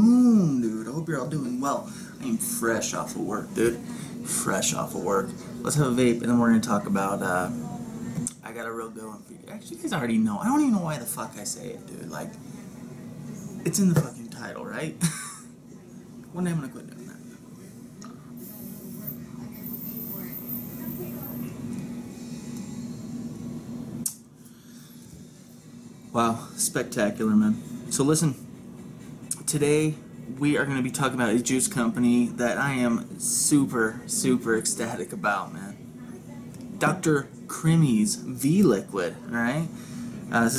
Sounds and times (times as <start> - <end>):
Speech: 0.2 - 15.0, 29.4 - 40.5.